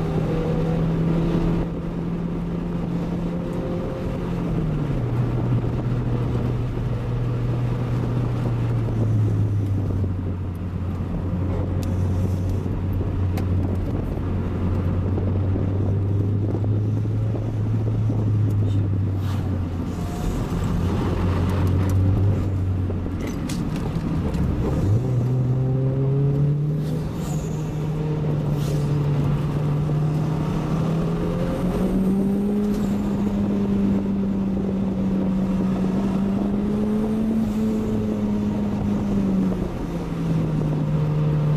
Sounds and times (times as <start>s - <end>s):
Car: 0.0s - 41.5s.